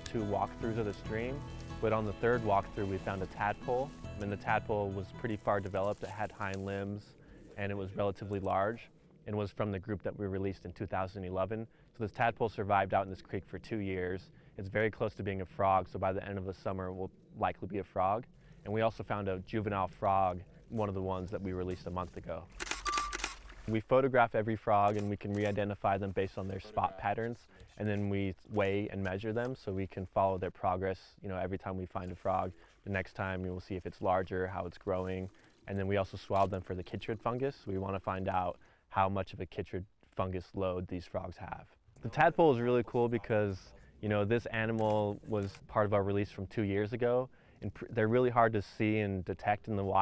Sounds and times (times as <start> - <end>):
Speech: 0.0 - 22.5, 23.7 - 50.0.